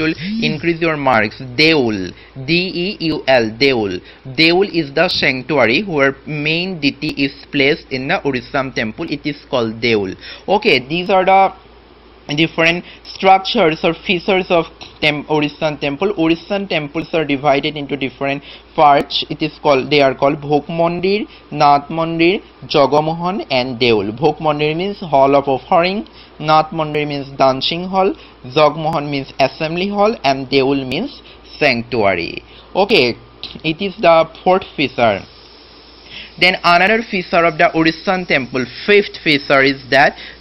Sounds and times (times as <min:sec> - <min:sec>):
Speech: 0:00.0 - 0:11.6, 0:12.3 - 0:35.3, 0:36.4 - 0:40.2.